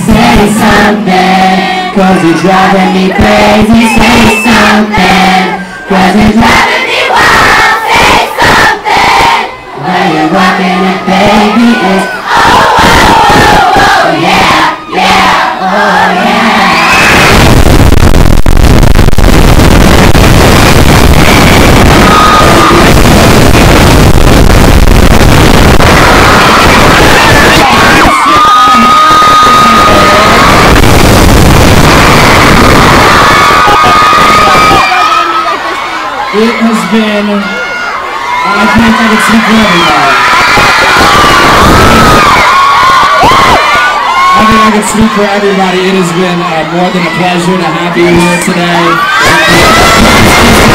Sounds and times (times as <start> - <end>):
Inside, public space: 0.0 - 50.7.